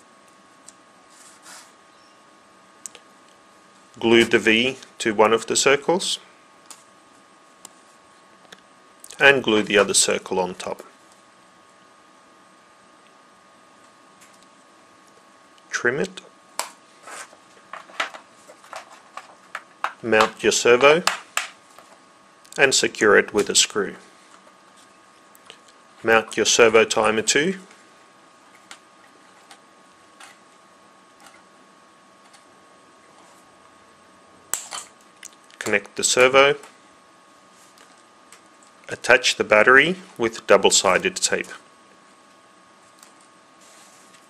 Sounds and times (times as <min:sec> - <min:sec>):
Speech: 0:04.0 - 0:06.3, 0:09.1 - 0:10.9, 0:15.7 - 0:16.3, 0:20.0 - 0:21.1, 0:22.6 - 0:24.1, 0:26.0 - 0:27.7, 0:35.6 - 0:36.7, 0:38.9 - 0:41.6.